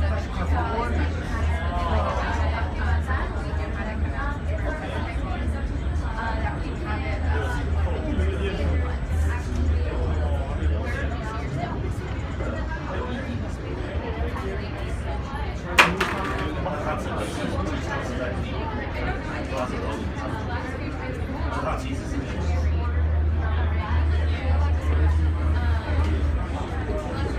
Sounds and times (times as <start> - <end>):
Speech: 0.0 - 27.3.